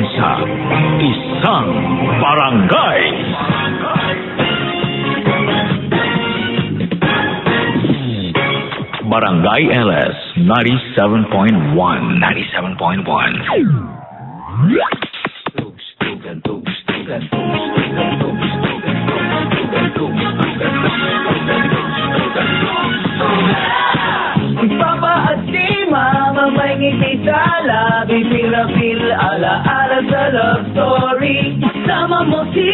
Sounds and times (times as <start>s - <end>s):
Music: 0.0s - 10.5s, 14.6s - 32.7s
Speech: 9.0s - 13.4s
Sound effect: 12.9s - 15.7s.